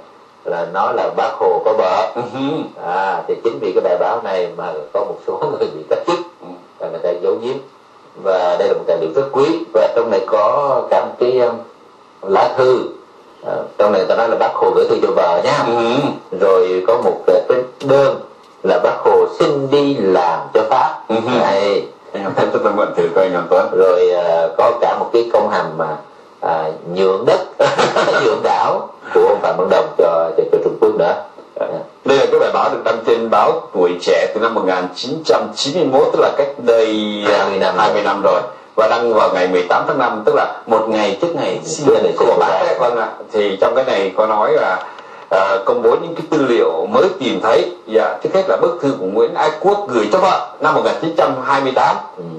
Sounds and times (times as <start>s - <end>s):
Speech: 0.0s - 52.3s.